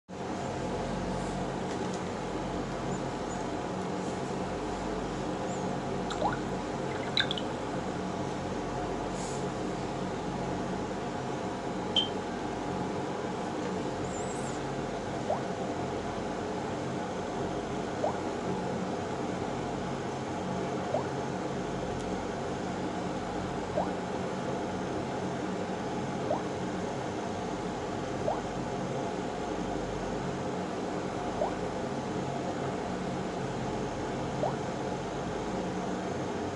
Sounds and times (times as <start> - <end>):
Drip: 6.1 - 7.4.